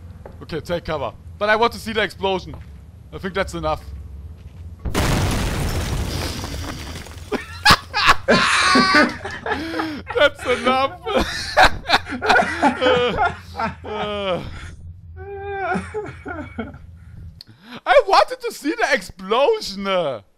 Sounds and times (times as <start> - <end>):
Speech: 0.4 - 2.6, 3.2 - 3.9, 17.9 - 20.3.